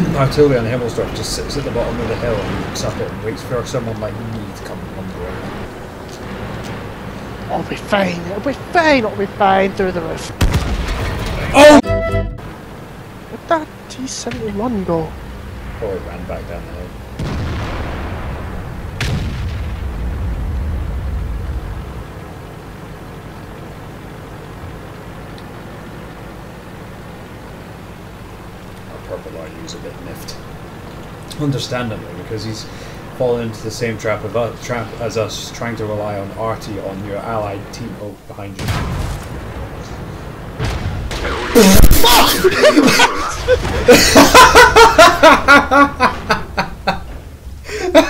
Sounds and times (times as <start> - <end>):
Artillery fire: 10.4 - 11.5, 17.2 - 21.8, 38.6 - 42.5, 43.3 - 44.3.